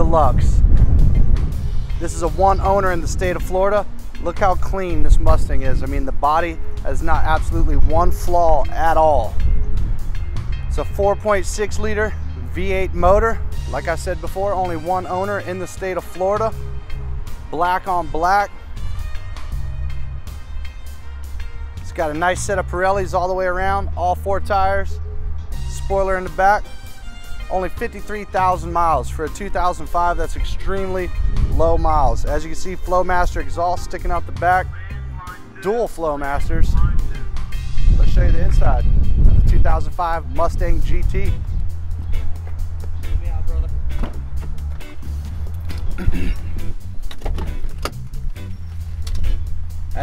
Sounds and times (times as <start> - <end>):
Speech: 0.0 - 0.6, 2.0 - 9.3, 10.7 - 16.6, 21.9 - 24.9, 27.5 - 37.3, 38.0 - 38.9, 39.5 - 41.4, 43.2 - 43.8
Music: 0.0 - 50.0.